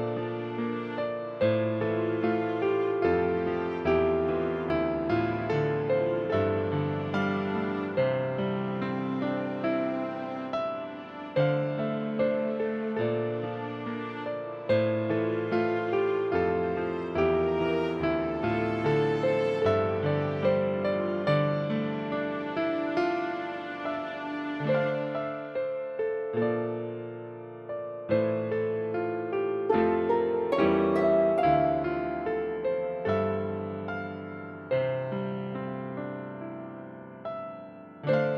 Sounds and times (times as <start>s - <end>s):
New-age music: 0.0s - 38.3s.